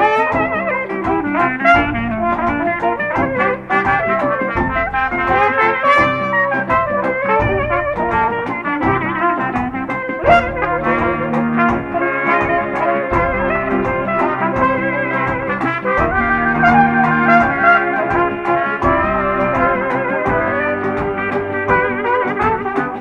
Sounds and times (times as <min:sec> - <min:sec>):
Trombone: 0:00.0 - 0:23.0
Trumpet: 0:00.0 - 0:23.0.